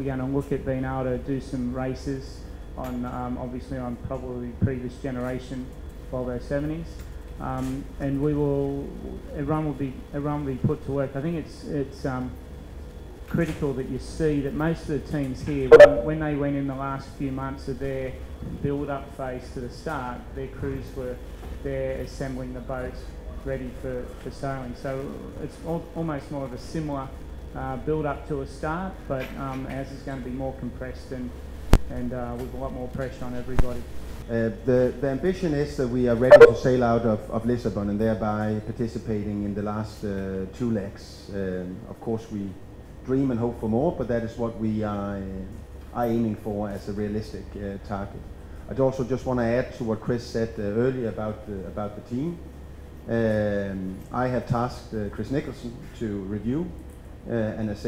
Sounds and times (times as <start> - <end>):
Speech: 0.0 - 12.4, 13.3 - 52.5, 53.1 - 57.8.